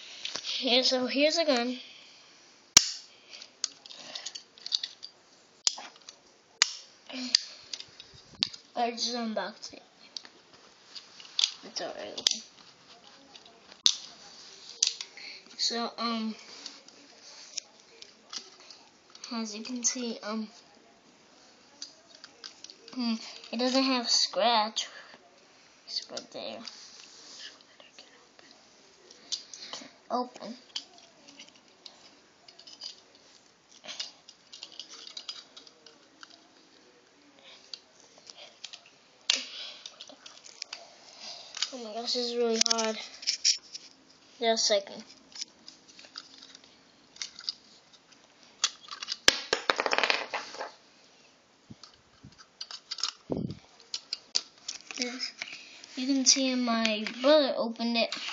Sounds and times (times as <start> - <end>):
Speech: 8.8 - 9.8, 44.4 - 45.0, 56.0 - 58.2.